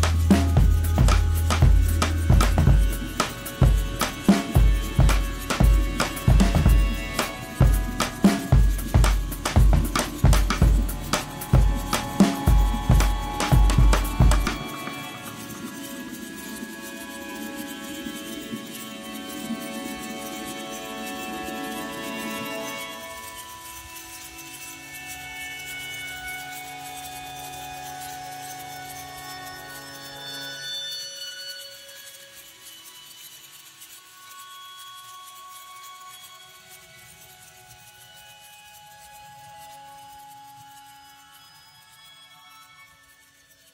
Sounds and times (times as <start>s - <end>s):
Music: 0.0s - 43.7s.